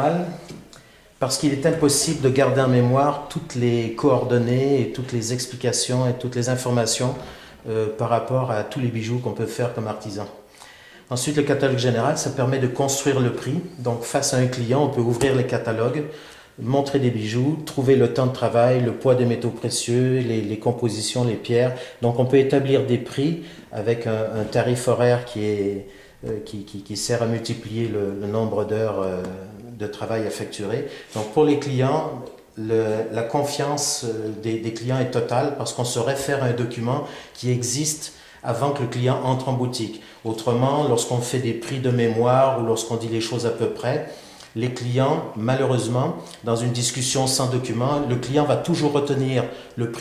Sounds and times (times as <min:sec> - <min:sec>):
Speech: 0:00.0 - 0:00.6, 0:01.2 - 0:10.4, 0:11.1 - 0:50.0.